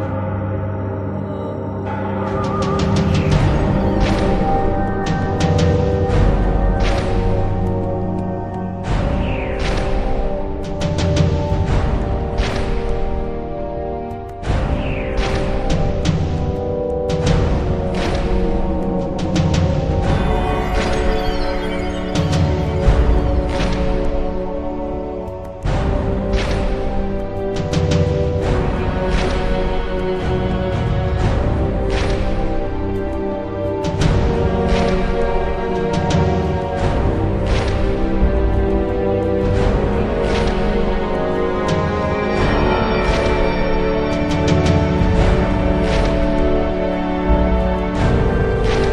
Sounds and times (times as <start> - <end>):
Music: 0.0 - 48.9.